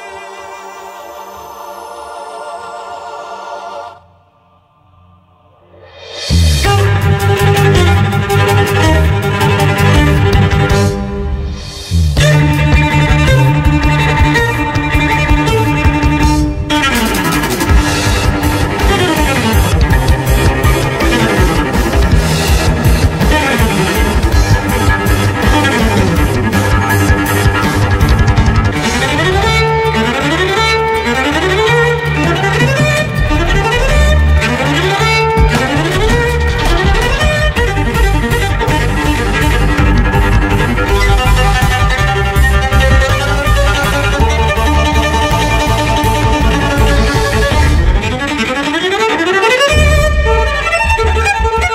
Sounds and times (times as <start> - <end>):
Cello: 5.8 - 51.7.